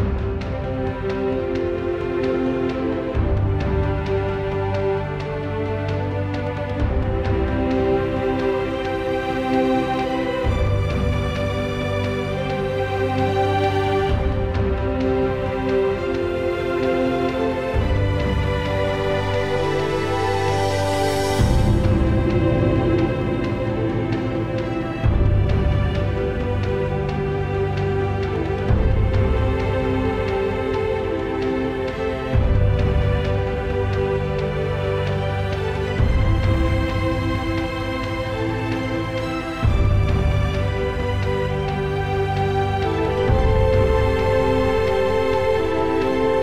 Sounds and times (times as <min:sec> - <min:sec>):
Music: 0:00.0 - 0:46.4.